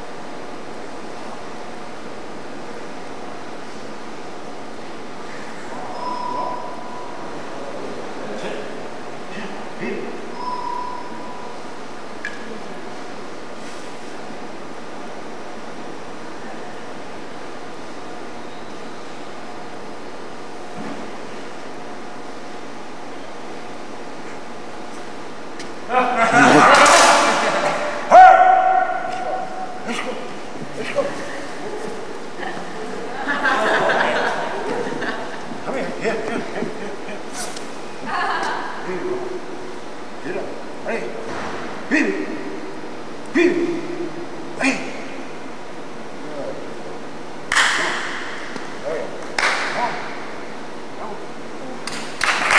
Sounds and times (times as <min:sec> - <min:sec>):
Inside, large room or hall: 0:00.0 - 0:52.5.